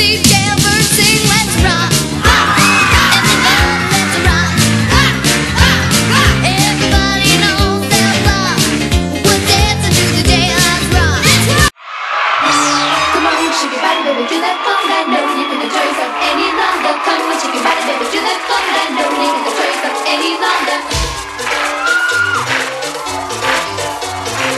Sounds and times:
Music: 0.0s - 11.8s, 12.4s - 24.5s.

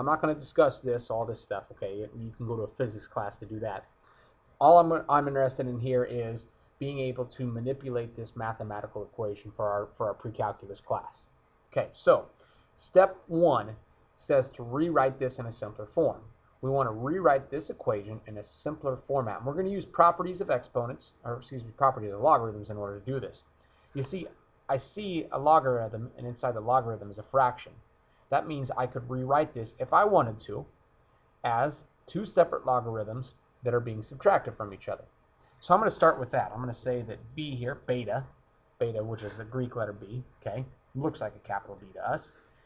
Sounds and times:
Speech: 0.0s - 3.9s, 4.6s - 30.8s, 31.4s - 42.4s.

